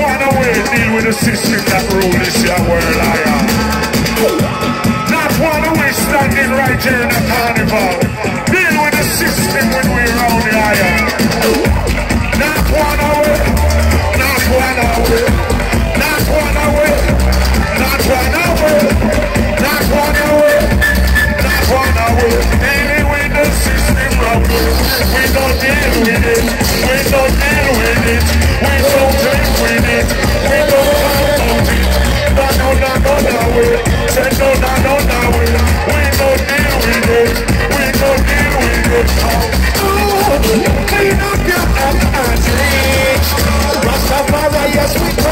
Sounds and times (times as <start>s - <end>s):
Music: 0.0s - 45.3s.